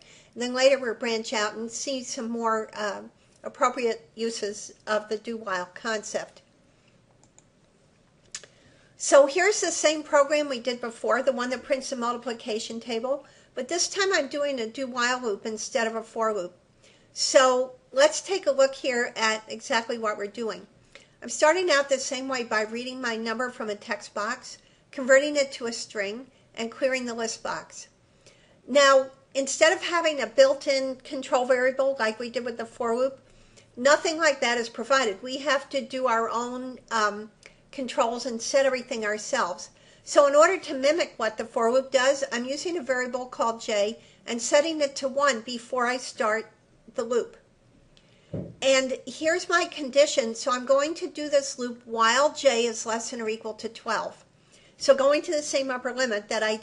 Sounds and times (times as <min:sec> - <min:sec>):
Narration, monologue: 0:00.0 - 0:56.6.